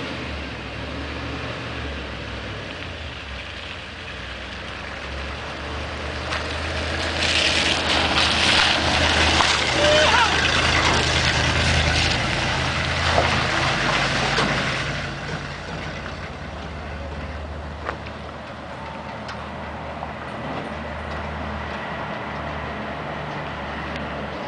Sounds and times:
Truck: 0:00.0 - 0:24.4.

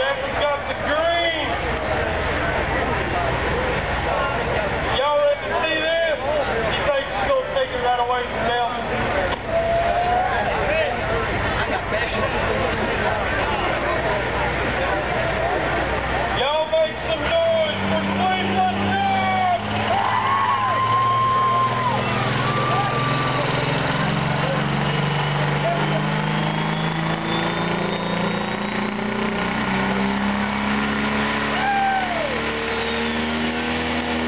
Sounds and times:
Speech: 0:00.0 - 0:19.7.

